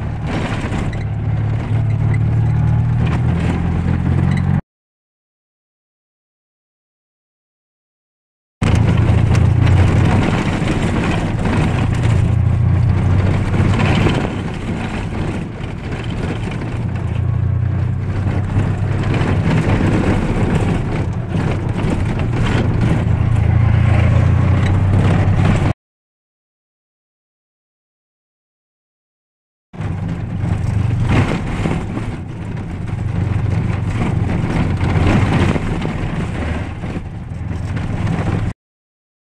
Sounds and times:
Motor vehicle (road): 0:00.0 - 0:04.6, 0:08.6 - 0:25.8, 0:29.8 - 0:38.6.

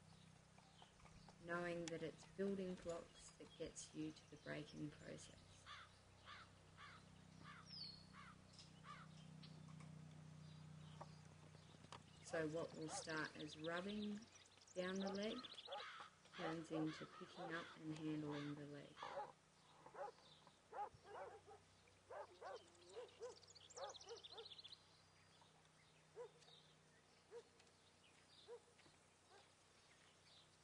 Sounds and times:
Outside, rural or natural: 0:00.0 - 0:30.6
Speech: 0:01.4 - 0:05.6, 0:12.3 - 0:15.5, 0:16.4 - 0:19.0
Animal: 0:15.0 - 0:24.7.

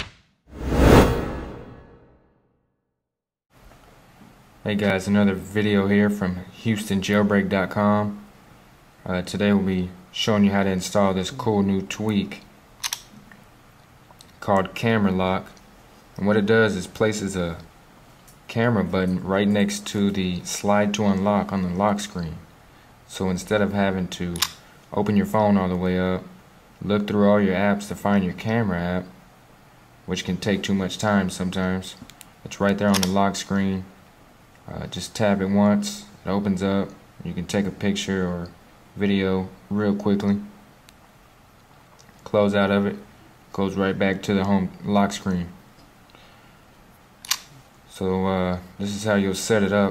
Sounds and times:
Speech: 0:04.6 - 0:08.3, 0:09.0 - 0:12.5, 0:14.4 - 0:15.6, 0:16.2 - 0:17.7, 0:18.5 - 0:22.5, 0:23.1 - 0:29.2, 0:30.1 - 0:34.0, 0:34.7 - 0:40.5, 0:42.2 - 0:45.6, 0:47.9 - 0:49.9.

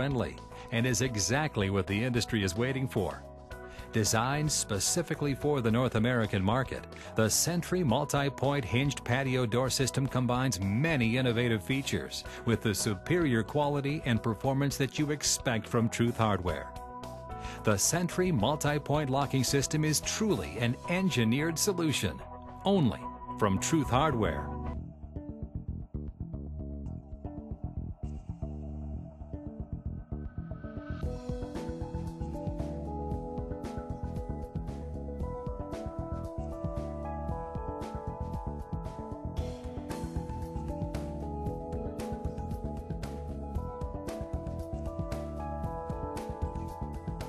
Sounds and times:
Speech: 0:00.0 - 0:03.2, 0:04.0 - 0:16.7, 0:17.6 - 0:24.5
Music: 0:00.0 - 0:47.2.

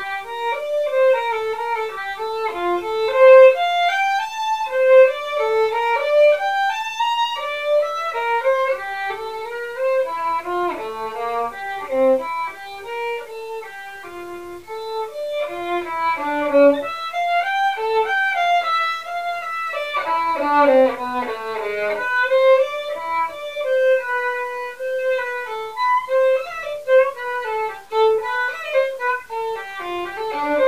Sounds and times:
Violin, fiddle: 0:00.0 - 0:30.6.

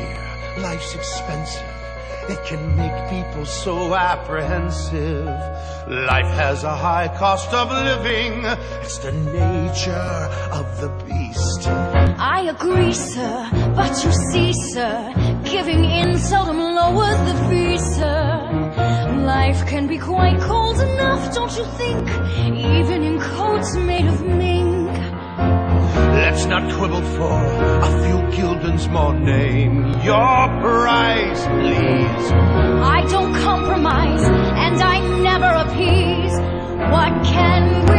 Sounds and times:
Music: 0:00.0 - 0:37.9.

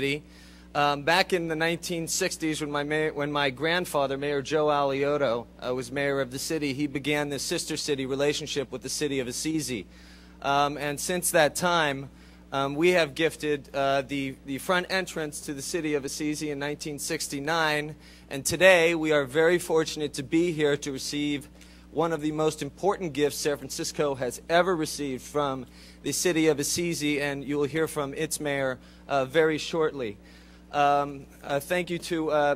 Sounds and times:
Male speech, man speaking: 0:00.0 - 0:00.2, 0:00.8 - 0:32.5.

